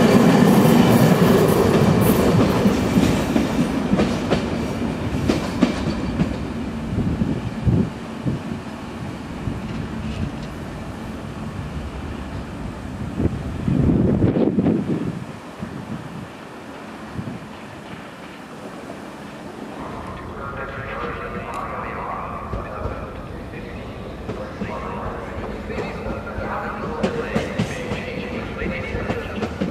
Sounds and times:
Railroad car, train wagon: 0:00.0 - 0:29.7
Train: 0:00.0 - 0:29.7
Wind noise (microphone): 0:06.9 - 0:08.6, 0:13.0 - 0:16.3, 0:17.2 - 0:17.5.

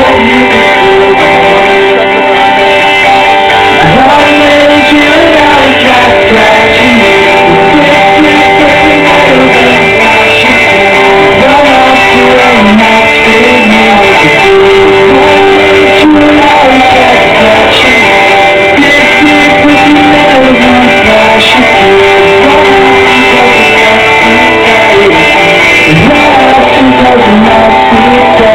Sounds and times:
Music: 0:00.0 - 0:28.5.

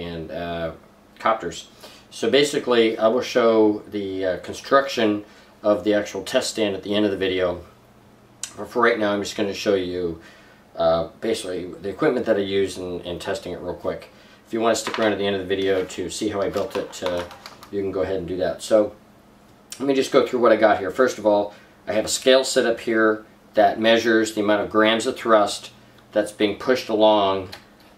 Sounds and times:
Speech: 0:00.0 - 0:07.8, 0:08.4 - 0:10.2, 0:10.8 - 0:19.0, 0:19.7 - 0:27.6.

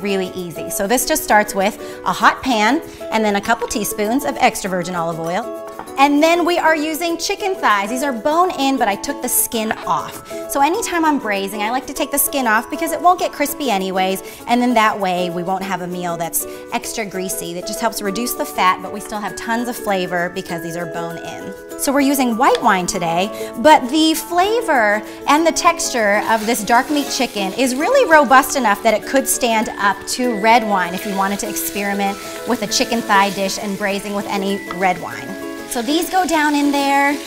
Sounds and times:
Speech: 0:00.0 - 0:05.4, 0:06.0 - 0:37.2
Music: 0:00.0 - 0:37.2.

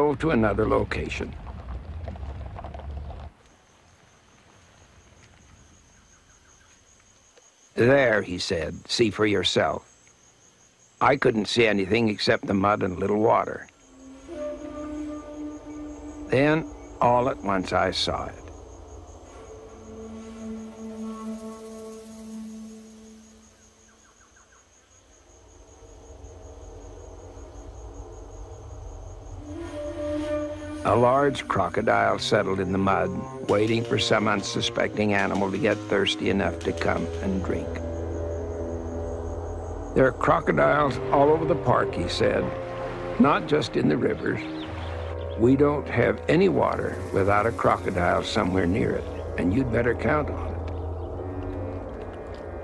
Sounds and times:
Environmental noise: 0:00.0 - 0:52.6.

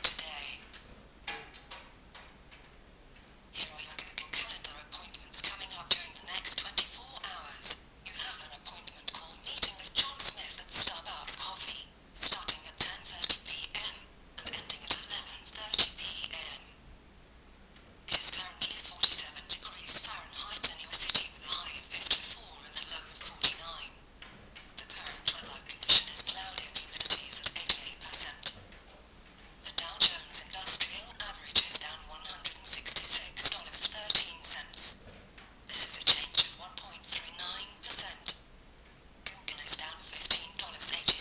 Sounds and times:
Speech: 0:00.0 - 0:00.7, 0:03.5 - 0:16.8, 0:18.1 - 0:24.0, 0:24.8 - 0:28.6, 0:29.6 - 0:35.0, 0:35.7 - 0:38.4, 0:39.3 - 0:41.2.

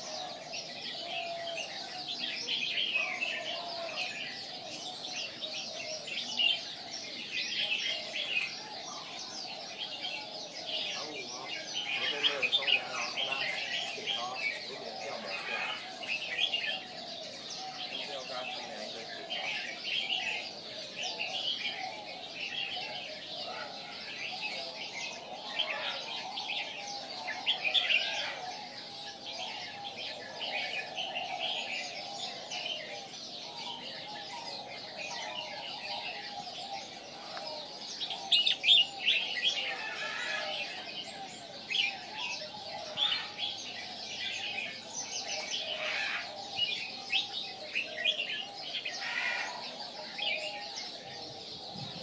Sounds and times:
Speech: 0:10.9 - 0:15.9, 0:17.9 - 0:19.7.

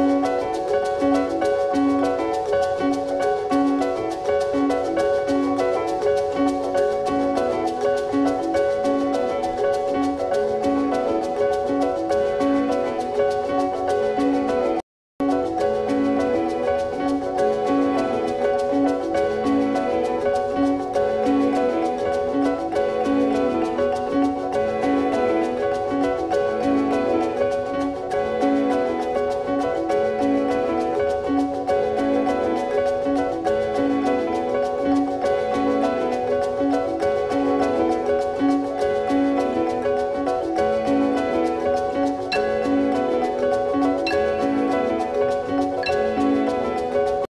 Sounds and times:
Music: 0:00.0 - 0:47.3.

